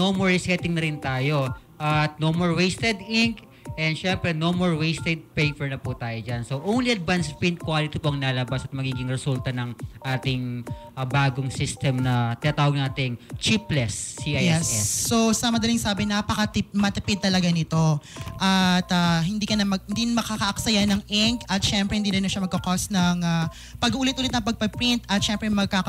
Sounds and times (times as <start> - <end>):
Music: 0.0 - 25.8
Speech: 0.0 - 25.8.